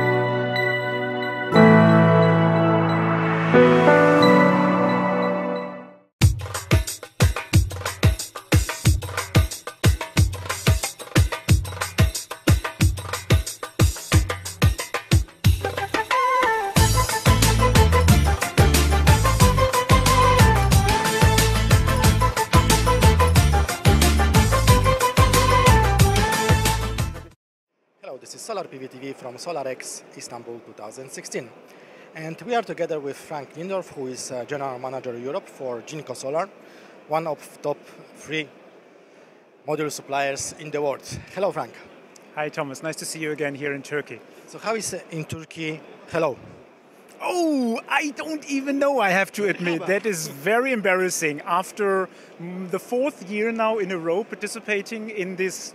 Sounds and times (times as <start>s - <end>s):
Music: 0.0s - 27.4s
Speech: 28.0s - 31.5s, 32.2s - 36.5s, 37.1s - 38.5s, 39.7s - 46.5s, 47.2s - 55.7s.